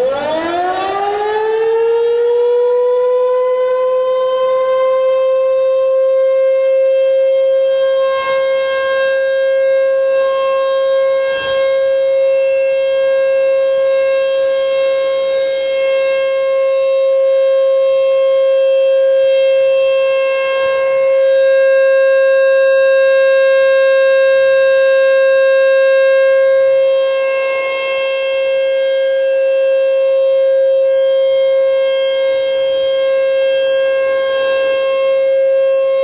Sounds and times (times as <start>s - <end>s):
Civil defense siren: 0.0s - 36.0s.